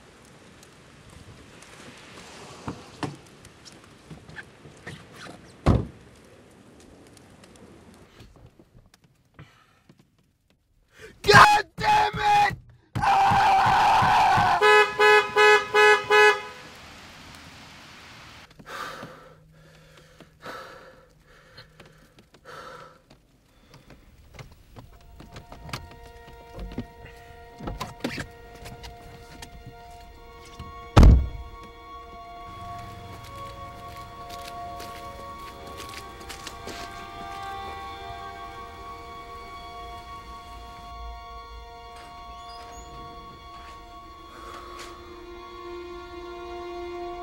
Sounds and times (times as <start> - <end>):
Outside, rural or natural: 0.0 - 47.2
Speech: 11.2 - 12.6
Air horn, truck horn: 14.0 - 16.7, 30.3 - 47.2.